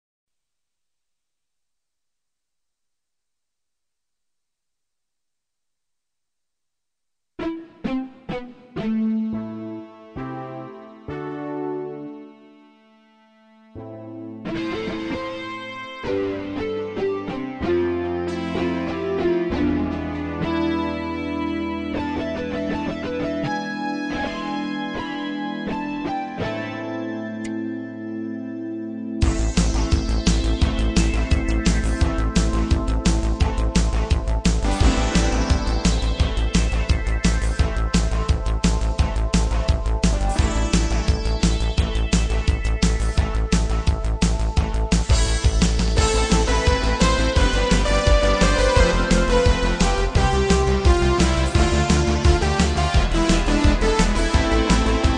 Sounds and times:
Rhythm and blues: 14.3 - 26.8, 29.2 - 55.1.

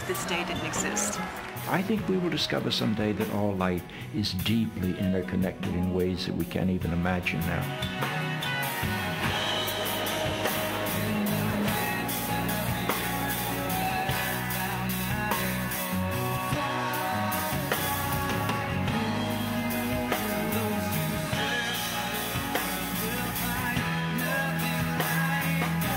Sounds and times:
Psychedelic rock: 7.2 - 25.9.

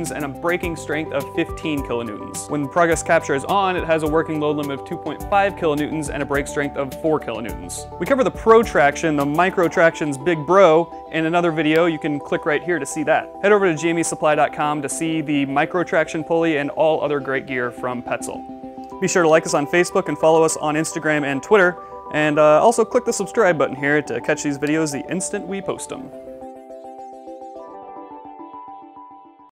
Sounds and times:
Speech: 0.0 - 18.4, 19.0 - 26.2
Music: 0.0 - 29.5.

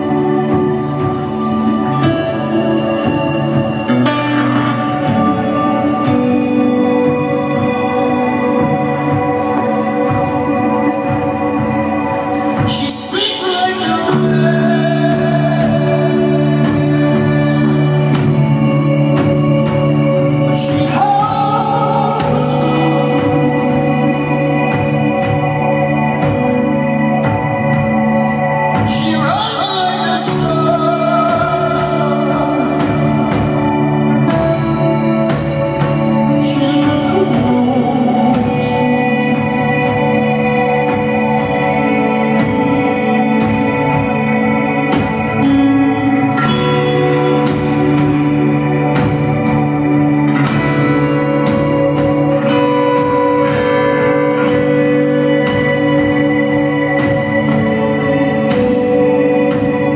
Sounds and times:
Music: 0.0 - 59.9.

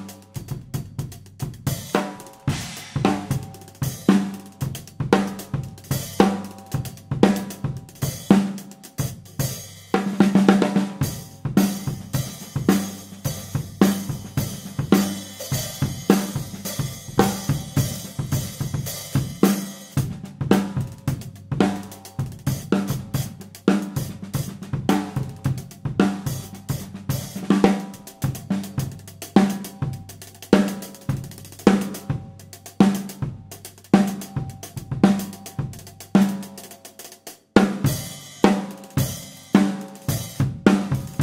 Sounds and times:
Drum kit: 0.0 - 41.2
Snare drum: 2.0 - 3.5.

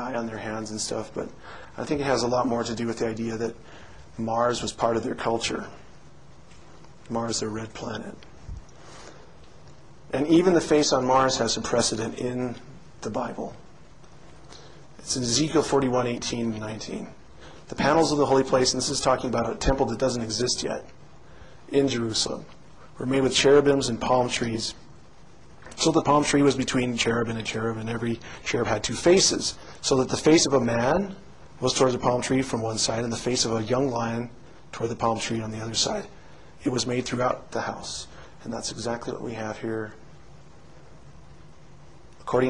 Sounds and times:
Speech: 0.0 - 3.6, 4.2 - 5.9, 7.0 - 8.3, 10.1 - 13.6, 15.0 - 21.0, 21.7 - 24.8, 25.7 - 40.0, 42.2 - 42.4.

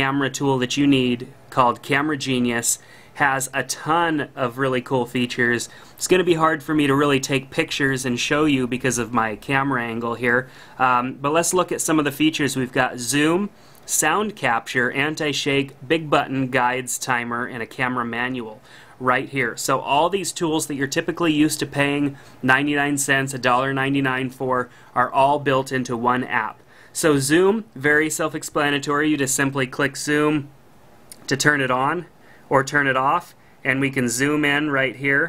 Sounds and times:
Speech: 0.0 - 30.5, 31.1 - 35.2.

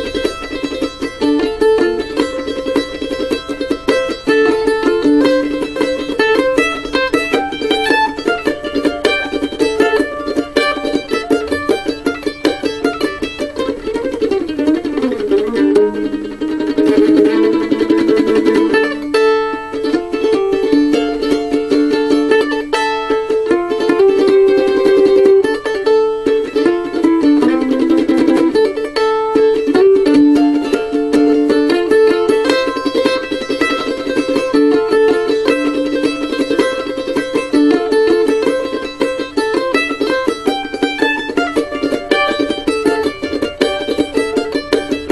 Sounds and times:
Guitar: 0.0 - 45.1
Mandolin: 0.0 - 45.1.

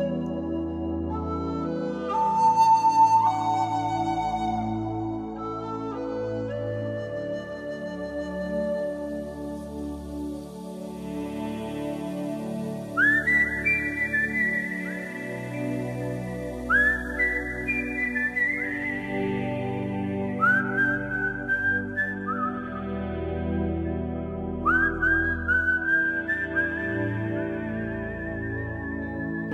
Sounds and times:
Music: 0.0 - 29.5.

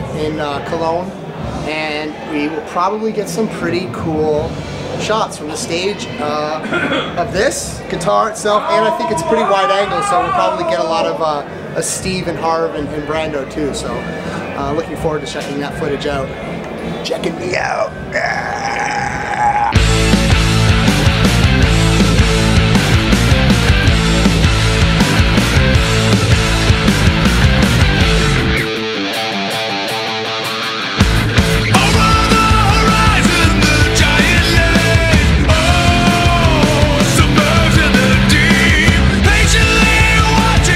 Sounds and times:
Speech: 0.0 - 16.4, 17.0 - 18.3
Music: 19.7 - 40.7.

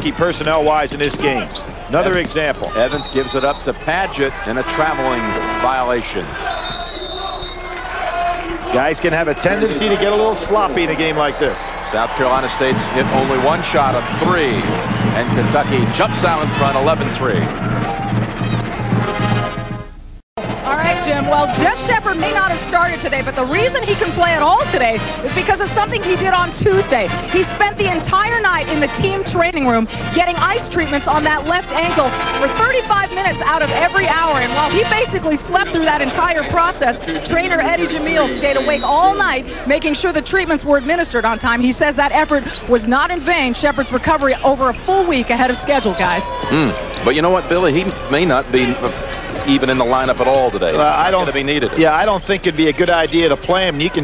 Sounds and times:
Music: 12.4 - 39.4.

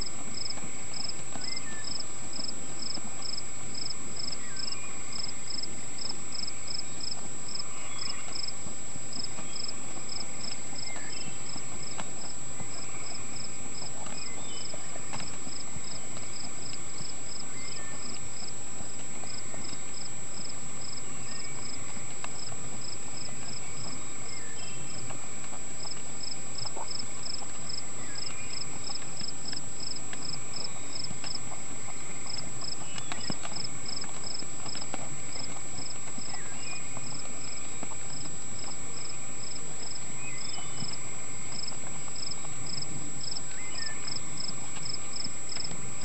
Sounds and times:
Clip-clop: 0.0 - 46.0.

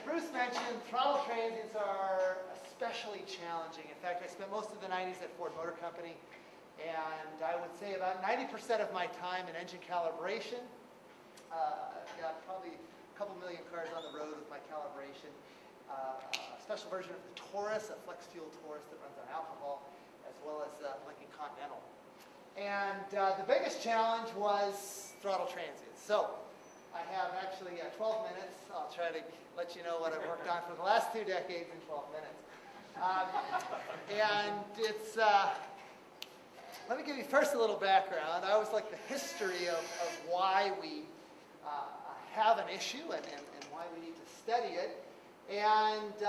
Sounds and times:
Speech: 0.0 - 6.2, 6.8 - 10.8, 11.4 - 21.9, 22.6 - 35.8, 36.7 - 46.2.

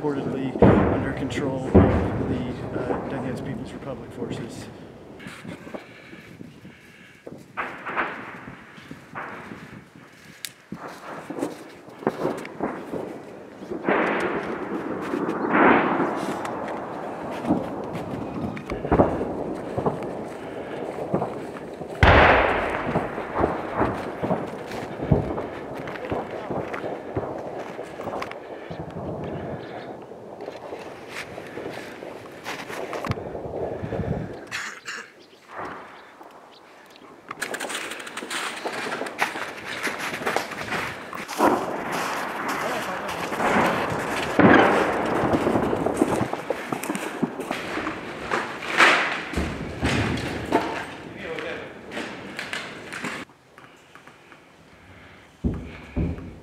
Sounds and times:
Speech: 0.0 - 4.7, 42.6 - 43.7, 51.2 - 51.7.

